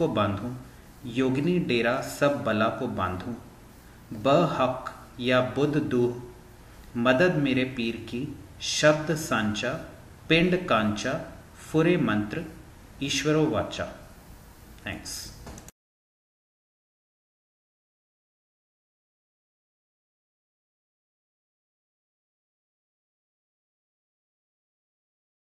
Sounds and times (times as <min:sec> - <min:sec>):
Speech: 0:00.0 - 0:03.5, 0:04.1 - 0:06.4, 0:07.0 - 0:14.1, 0:14.8 - 0:15.4.